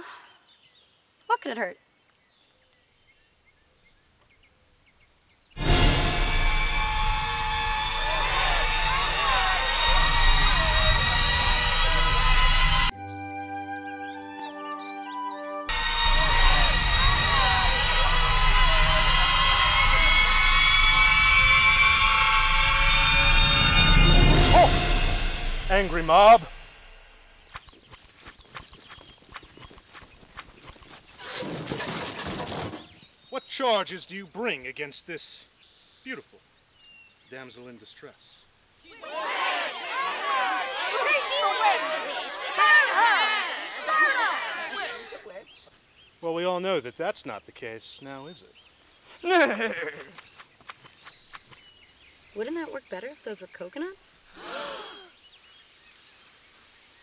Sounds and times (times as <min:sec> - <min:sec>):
Music: 0:05.6 - 0:27.2.